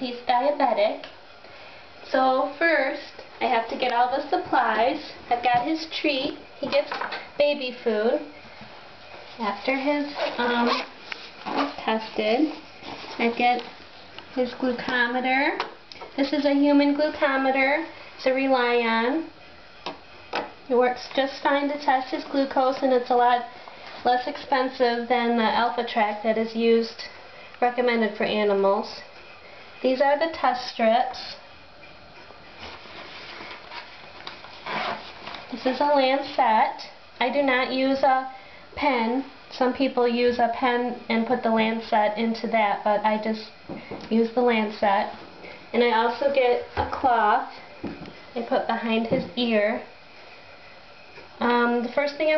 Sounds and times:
Speech: 0.0 - 1.2, 2.1 - 8.3, 9.4 - 10.9, 11.6 - 12.6, 13.2 - 13.8, 14.4 - 19.3, 20.7 - 29.1, 29.8 - 31.4, 35.5 - 47.6, 48.4 - 49.9, 51.4 - 52.3.

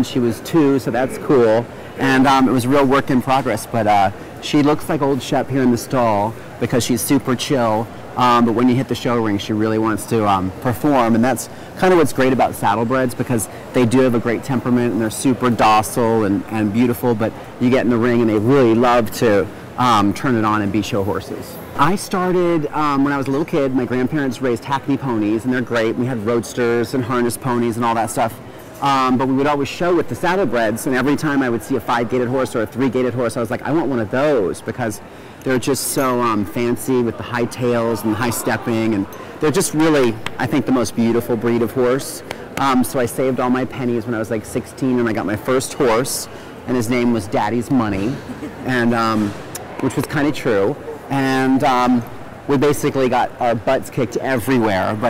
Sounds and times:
Speech: 0.0 - 55.0.

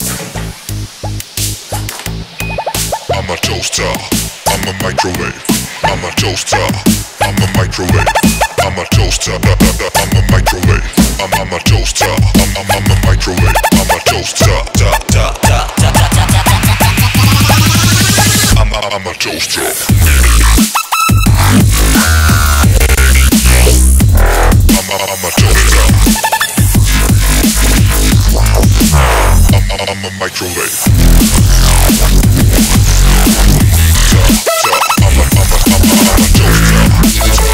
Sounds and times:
Dubstep: 0.0 - 37.5.

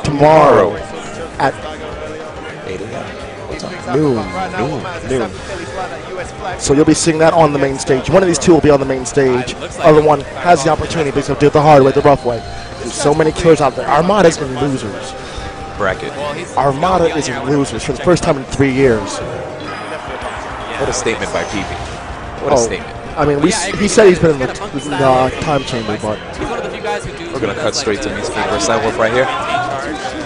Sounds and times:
Speech: 0.0 - 15.1, 15.8 - 19.2, 22.4 - 30.2
Music: 0.0 - 30.2.

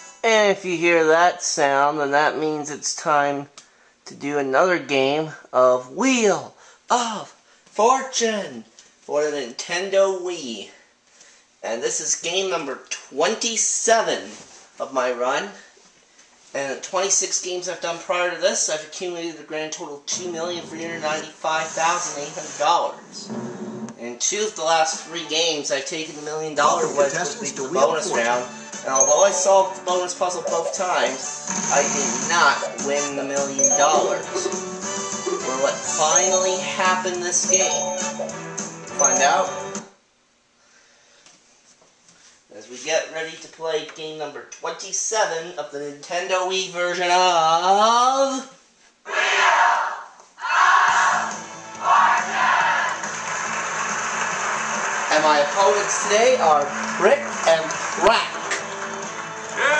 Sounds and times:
Music: 0.0 - 0.6, 20.1 - 21.4, 26.6 - 40.0, 50.8 - 59.7
Speech: 0.2 - 3.5, 4.1 - 10.8, 11.6 - 15.7, 16.5 - 23.3, 24.0 - 34.5, 35.4 - 37.8, 39.0 - 39.5, 42.5 - 48.6, 55.1 - 58.4.

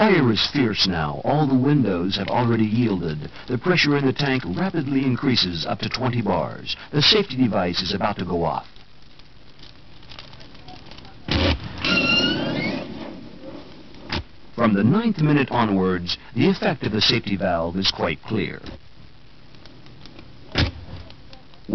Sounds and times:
Speech: 0.0 - 8.7, 14.6 - 18.8, 21.0 - 21.7
Fire: 0.0 - 21.7.

